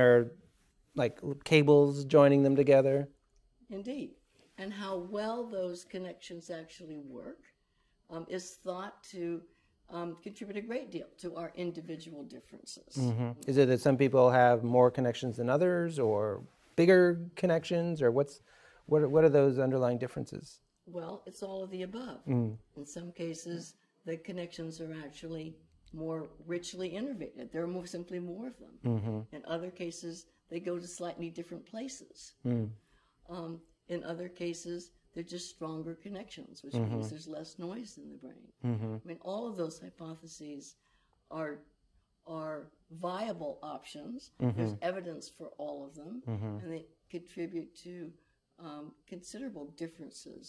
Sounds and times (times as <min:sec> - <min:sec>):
Conversation: 0:00.0 - 0:50.4.